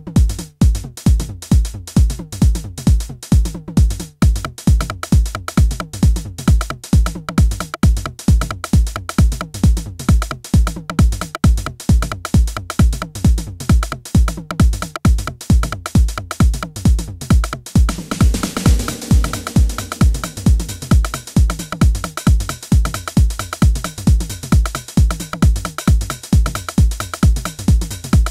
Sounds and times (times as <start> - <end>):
Techno: 16.8 - 28.3.